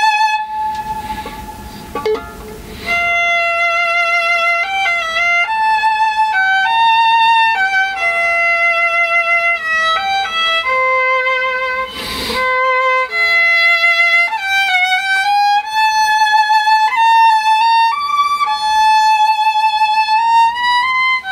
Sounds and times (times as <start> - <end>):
Violin, fiddle: 0.0 - 2.0, 2.6 - 21.3.